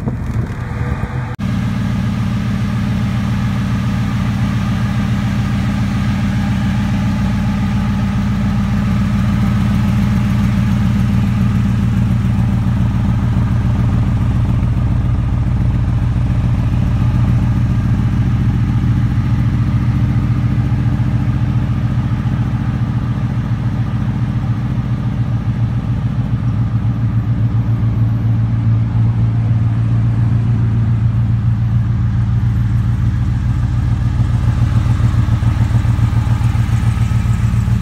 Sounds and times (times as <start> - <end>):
Car: 0.0 - 37.8
Idling: 0.0 - 37.8
Medium engine (mid frequency): 0.0 - 37.8.